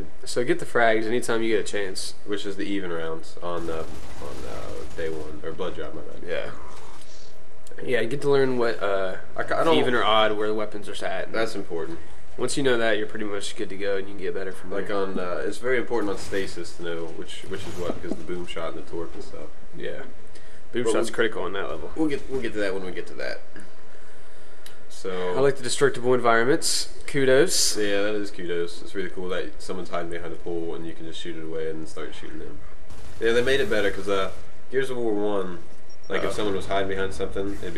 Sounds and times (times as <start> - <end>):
Speech: 0.0 - 6.6, 7.7 - 20.1, 20.8 - 23.5, 24.9 - 32.6, 33.2 - 37.7.